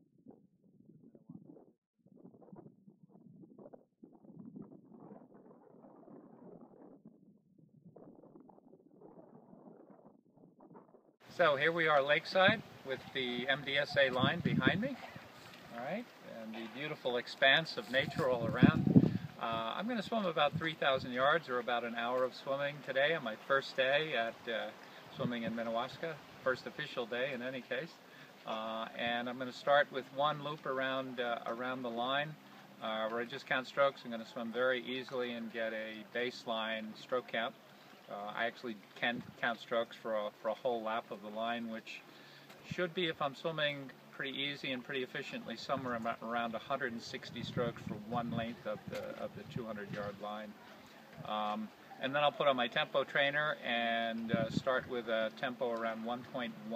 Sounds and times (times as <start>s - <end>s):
Speech: 11.3s - 42.0s, 42.6s - 50.6s, 51.2s - 56.7s.